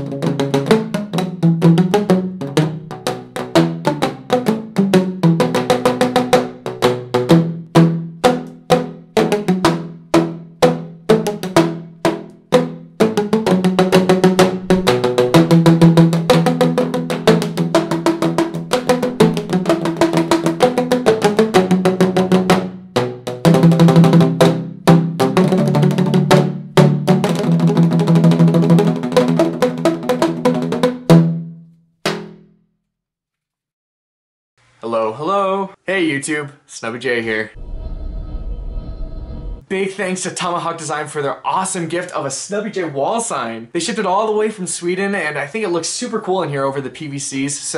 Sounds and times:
Speech: 0:34.8 - 0:37.6, 0:39.7 - 0:47.7.

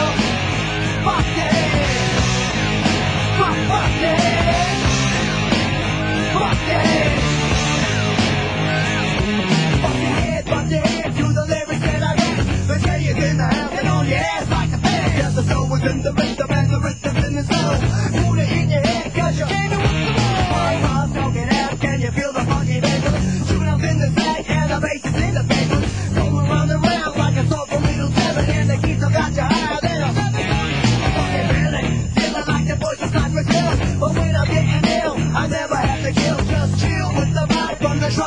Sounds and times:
Funk: 0:00.0 - 0:38.2.

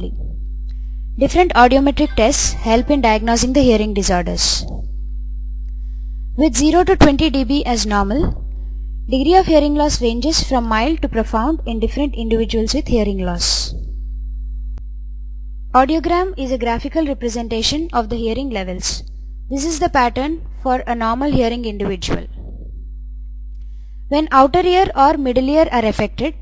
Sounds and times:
Female speech, woman speaking: 0:00.0 - 0:00.3, 0:01.2 - 0:04.8, 0:06.4 - 0:08.4, 0:09.1 - 0:13.8, 0:15.8 - 0:22.3, 0:24.1 - 0:26.4.

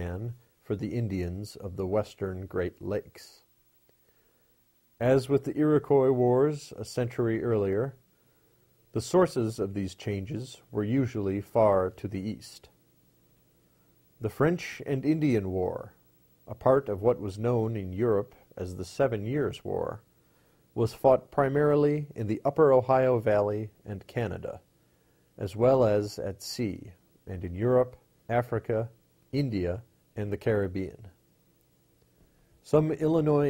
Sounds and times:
Speech: 0:00.0 - 0:03.5, 0:05.0 - 0:08.0, 0:08.9 - 0:12.8, 0:14.2 - 0:20.1, 0:20.8 - 0:24.7, 0:25.4 - 0:31.2, 0:32.6 - 0:33.4.

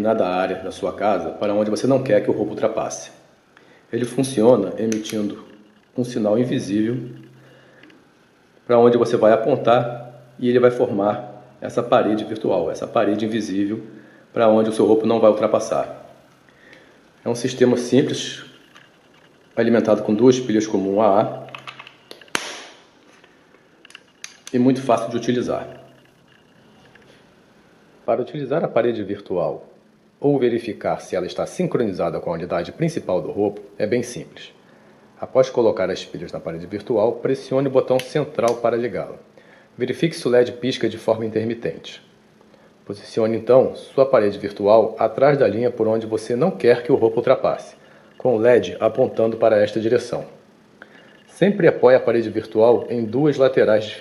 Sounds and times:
Speech: 0:00.0 - 0:03.3, 0:03.9 - 0:07.2, 0:08.7 - 0:16.1, 0:17.2 - 0:18.6, 0:19.6 - 0:21.5, 0:24.5 - 0:25.8, 0:28.1 - 0:34.6, 0:35.2 - 0:42.1, 0:42.9 - 0:50.4, 0:51.3 - 0:54.0.

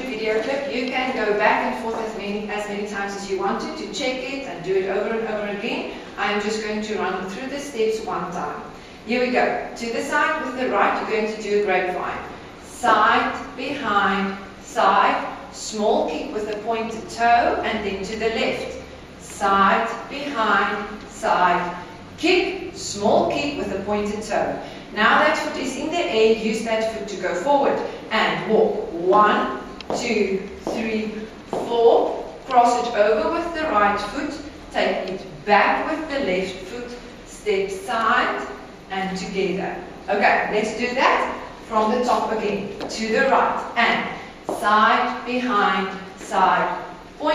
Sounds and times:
Speech: 0:00.0 - 0:47.3.

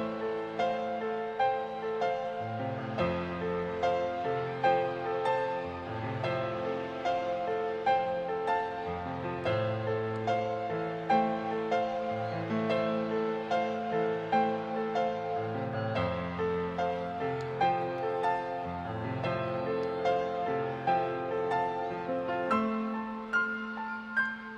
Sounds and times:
Music: 0:00.0 - 0:24.5.

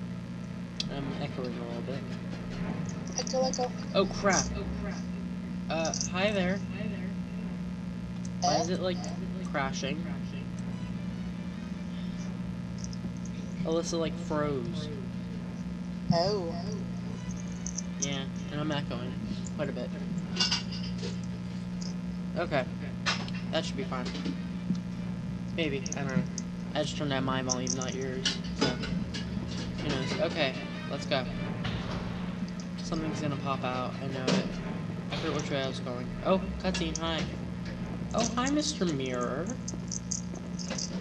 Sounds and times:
Speech: 0:00.8 - 0:02.1, 0:03.2 - 0:07.3, 0:08.3 - 0:10.5, 0:13.5 - 0:15.5, 0:16.1 - 0:17.2, 0:18.0 - 0:20.1, 0:22.4 - 0:22.9, 0:23.5 - 0:24.3, 0:25.6 - 0:28.8, 0:29.8 - 0:31.3, 0:32.8 - 0:37.4, 0:38.2 - 0:39.6
Music: 0:00.8 - 0:07.8, 0:08.4 - 0:21.2, 0:21.8 - 0:41.0.

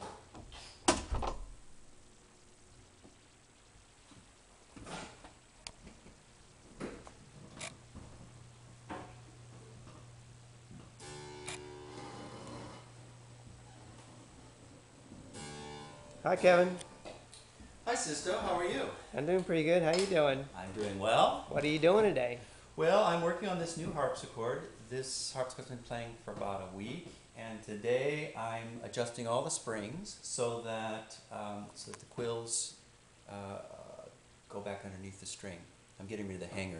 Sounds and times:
Speech: 0:16.2 - 0:16.8, 0:17.9 - 0:36.8.

